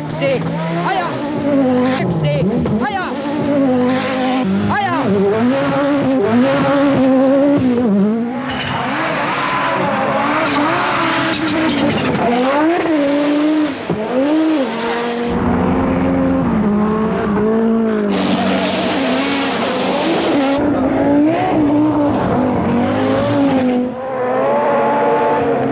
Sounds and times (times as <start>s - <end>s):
Speech: 0.0s - 1.2s, 1.8s - 3.2s, 4.7s - 5.1s
Accelerating, revving, vroom: 0.0s - 25.7s
Car: 0.0s - 25.7s.